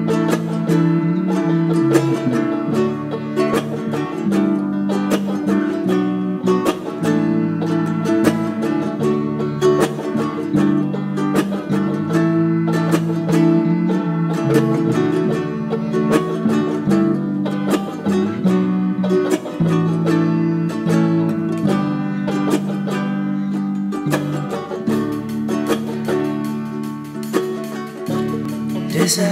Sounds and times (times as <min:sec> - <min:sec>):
Ukulele: 0:00.0 - 0:29.3.